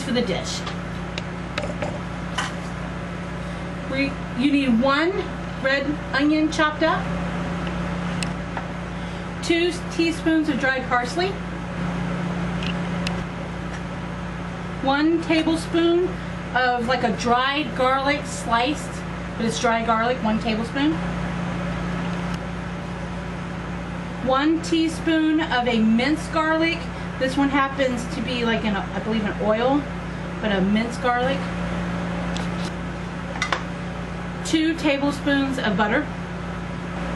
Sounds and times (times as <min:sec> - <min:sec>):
Speech: 0:00.0 - 0:00.8, 0:03.9 - 0:07.1, 0:09.4 - 0:11.4, 0:14.8 - 0:21.0, 0:24.2 - 0:31.5, 0:34.4 - 0:36.1.